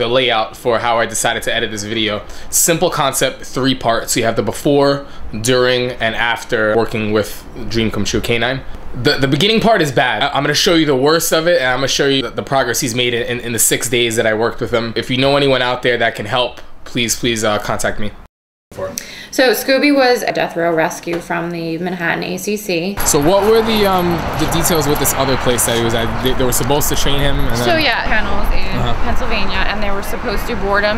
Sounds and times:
Speech: 0:00.0 - 0:18.2, 0:18.8 - 0:30.9.

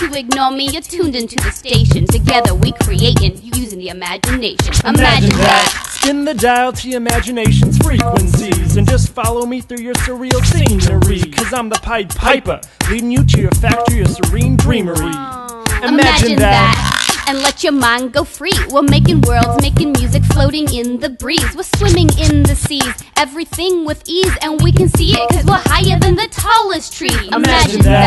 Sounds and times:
Exciting music: 0:04.3 - 0:18.0, 0:27.1 - 0:28.0.

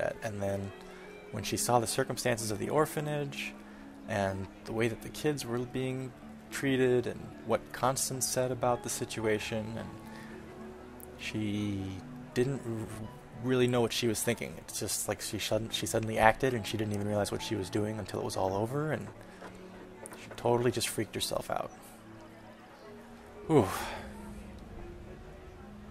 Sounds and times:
Speech: 0:00.0 - 0:00.7, 0:01.4 - 0:03.5, 0:04.1 - 0:10.0, 0:11.2 - 0:19.1, 0:20.2 - 0:21.7
Music: 0:00.0 - 0:25.9.

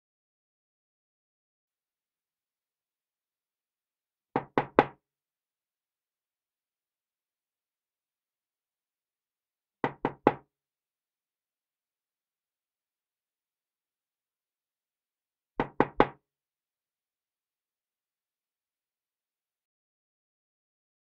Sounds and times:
Knock: 0:04.4 - 0:05.0, 0:09.9 - 0:10.5, 0:15.6 - 0:16.2.

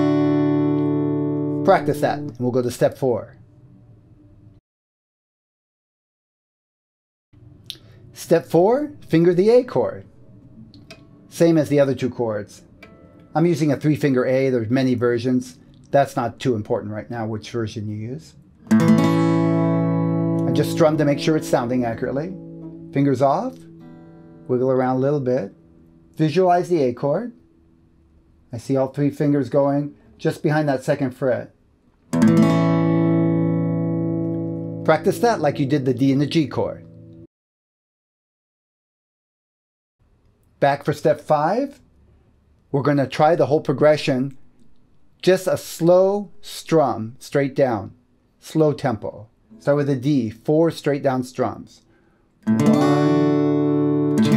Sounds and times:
Acoustic guitar: 0:00.0 - 0:02.4, 0:18.6 - 0:26.2, 0:32.1 - 0:37.2, 0:52.4 - 0:54.3
Speech: 0:01.6 - 0:03.4, 0:08.2 - 0:10.1, 0:11.3 - 0:12.7, 0:13.4 - 0:18.4, 0:20.5 - 0:22.4, 0:23.0 - 0:23.6, 0:24.5 - 0:25.6, 0:26.2 - 0:27.4, 0:28.5 - 0:31.6, 0:34.9 - 0:36.9, 0:40.6 - 0:41.8, 0:42.7 - 0:44.4, 0:45.2 - 0:51.8.

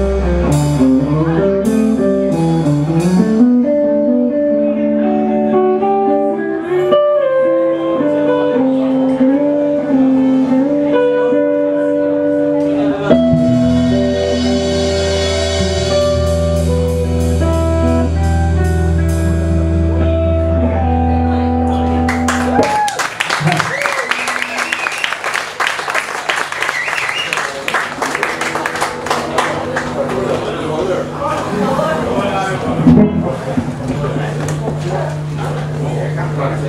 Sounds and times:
Blues: 0:00.0 - 0:36.6.

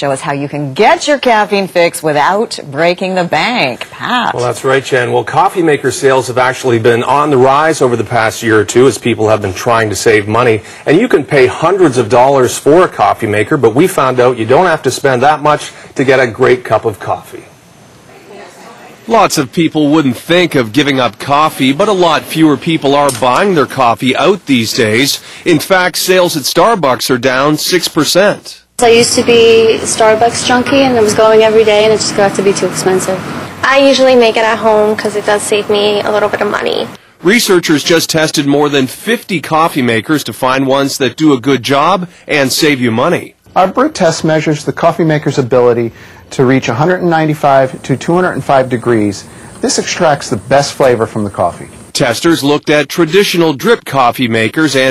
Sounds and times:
Speech: 0:18.3 - 0:32.3, 0:33.7 - 0:54.9.

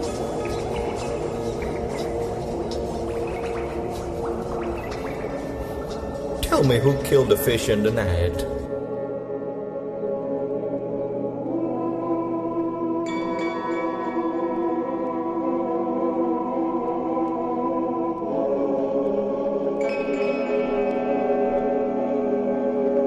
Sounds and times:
Music: 0:00.0 - 0:23.0
Speech: 0:06.4 - 0:08.7.

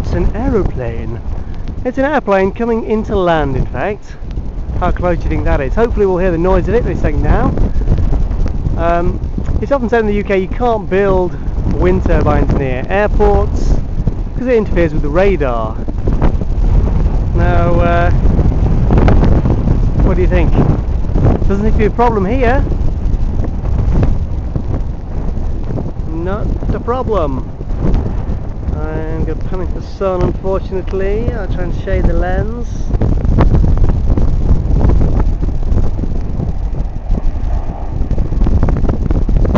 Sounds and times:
Speech: 0:00.0 - 0:01.2, 0:01.9 - 0:04.2, 0:04.8 - 0:07.6, 0:08.8 - 0:13.8, 0:14.4 - 0:15.8, 0:17.4 - 0:18.2, 0:20.1 - 0:20.6, 0:21.4 - 0:22.7, 0:26.1 - 0:27.4, 0:28.7 - 0:32.9
Wind noise (microphone): 0:00.0 - 0:39.5.

